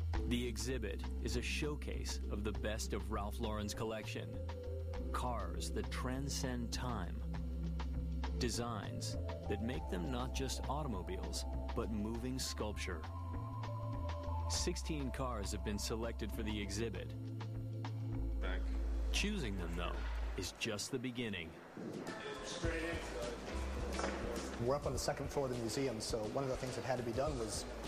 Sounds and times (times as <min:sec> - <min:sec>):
Music: 0:00.0 - 0:20.7, 0:21.9 - 0:27.8
Speech: 0:00.3 - 0:04.4, 0:05.1 - 0:07.2, 0:08.4 - 0:13.1, 0:14.5 - 0:17.1, 0:18.4 - 0:21.6, 0:24.6 - 0:27.7.